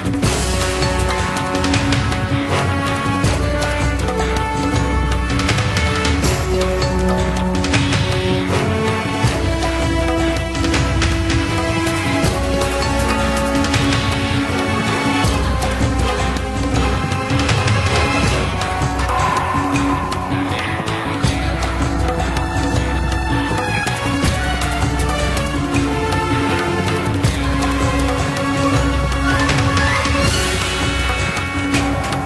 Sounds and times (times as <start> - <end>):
Music: 0.0 - 32.2.